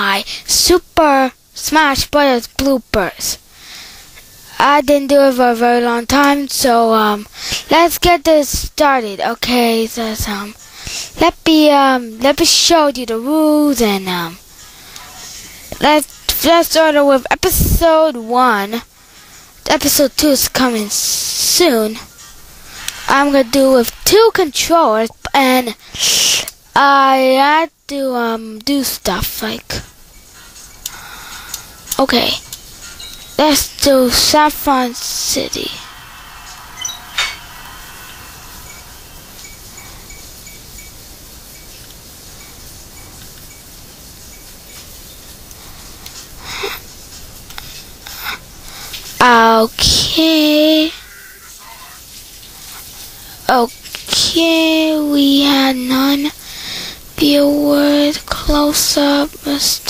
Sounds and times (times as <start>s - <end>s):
Speech: 0.0s - 3.4s, 4.5s - 10.6s, 11.2s - 14.4s, 15.0s - 18.9s, 19.6s - 22.1s, 23.1s - 29.9s, 32.0s - 32.5s, 33.4s - 35.9s, 49.2s - 51.0s, 53.5s - 56.4s, 57.2s - 59.8s.